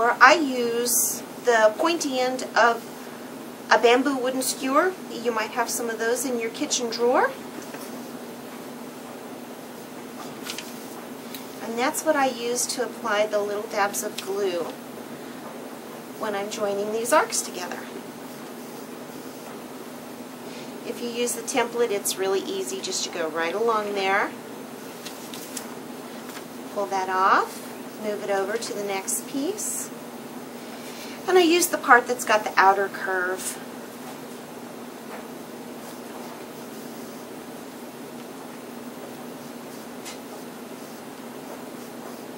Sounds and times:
Speech: 0:00.0 - 0:02.8, 0:03.7 - 0:07.4, 0:11.6 - 0:14.8, 0:16.2 - 0:18.0, 0:20.8 - 0:24.4, 0:26.7 - 0:29.9, 0:31.2 - 0:33.7
Inside, small room: 0:00.0 - 0:42.3.

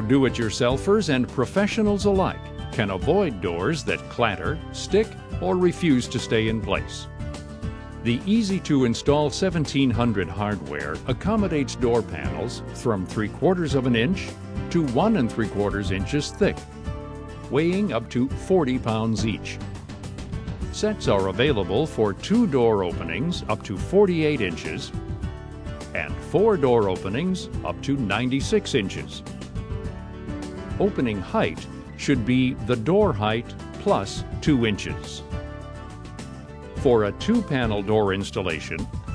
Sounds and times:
Speech: 0:00.0 - 0:07.1, 0:08.1 - 0:16.6, 0:17.5 - 0:19.6, 0:20.8 - 0:24.9, 0:26.0 - 0:29.2, 0:30.8 - 0:35.2, 0:36.8 - 0:38.9
Music: 0:00.0 - 0:39.1.

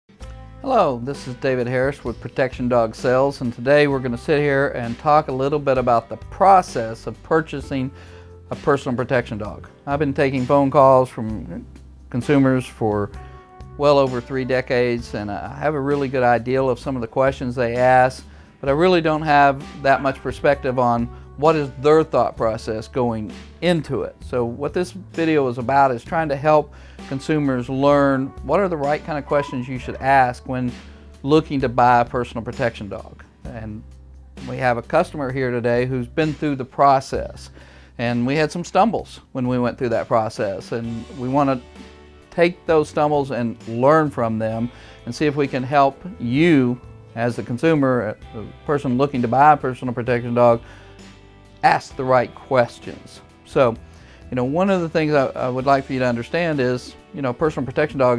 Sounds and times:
Music: 0:00.1 - 0:58.1
Speech: 0:00.6 - 0:07.9, 0:08.5 - 0:13.1, 0:13.8 - 0:33.8, 0:34.4 - 0:41.6, 0:42.3 - 0:50.6, 0:51.6 - 0:58.1.

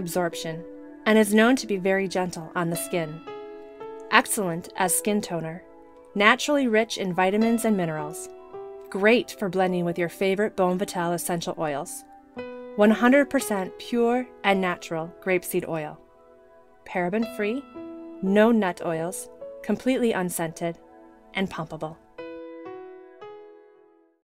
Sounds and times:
Speech: 0:00.0 - 0:03.2, 0:04.1 - 0:05.6, 0:06.2 - 0:08.3, 0:09.0 - 0:12.0, 0:12.8 - 0:16.0, 0:16.9 - 0:17.6, 0:18.2 - 0:20.8, 0:21.4 - 0:22.0
Music: 0:00.0 - 0:24.2.

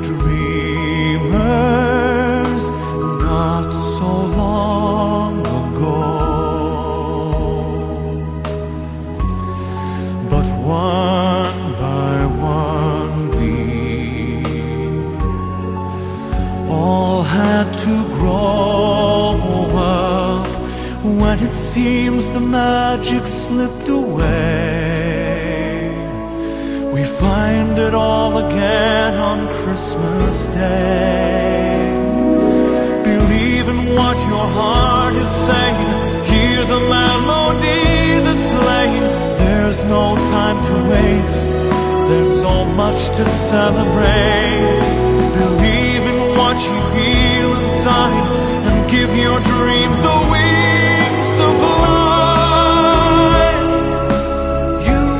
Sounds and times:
Music: 0:00.0 - 0:55.1.

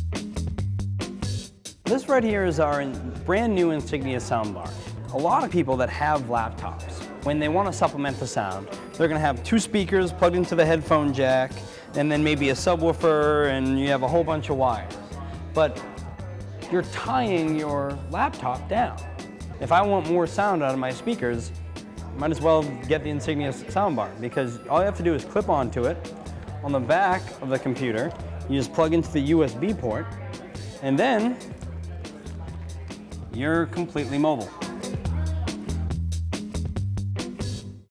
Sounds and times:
Music: 0:00.0 - 0:37.9
Speech: 0:01.9 - 0:19.0, 0:19.6 - 0:21.5, 0:22.1 - 0:31.6, 0:33.3 - 0:35.6.

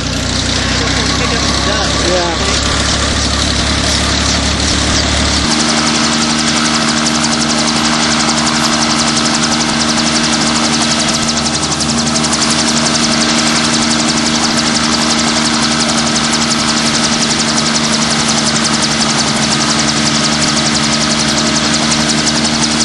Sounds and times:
Vehicle: 0:00.0 - 0:22.8.

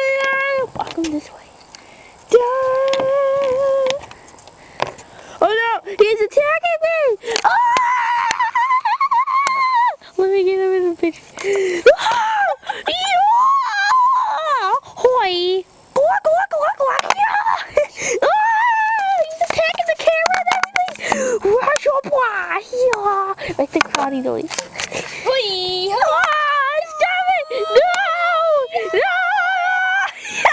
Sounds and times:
Speech: 0:19.2 - 0:24.5.

